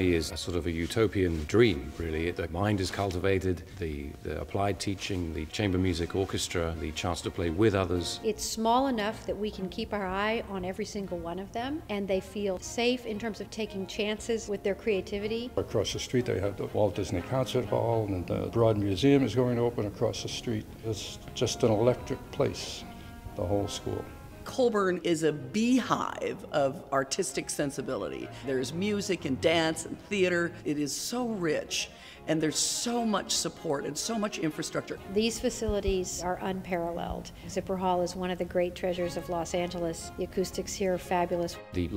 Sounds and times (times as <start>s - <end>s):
Music: 0.0s - 41.9s.